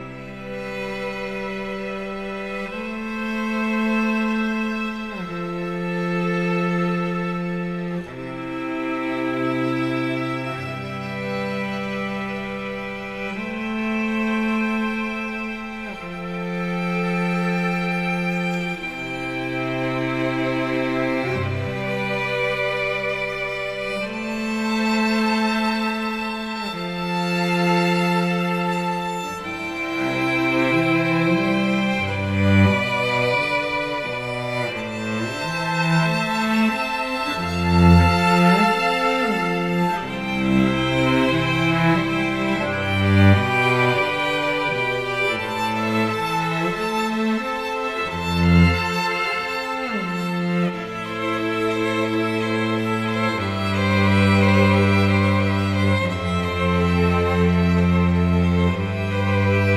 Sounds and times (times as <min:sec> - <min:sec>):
Music: 0:00.0 - 0:59.7.